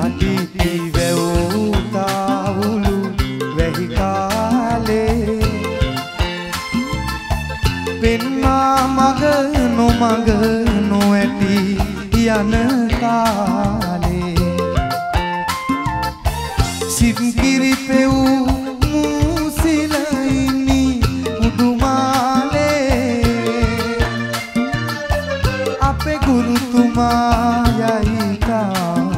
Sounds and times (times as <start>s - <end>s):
Folk music: 0.0s - 29.1s.